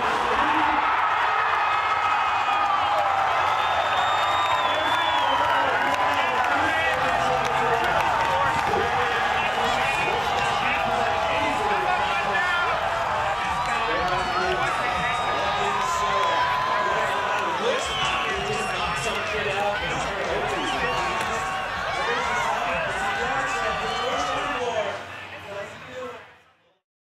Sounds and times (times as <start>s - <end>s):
Speech: 4.7s - 12.8s, 13.4s - 26.8s.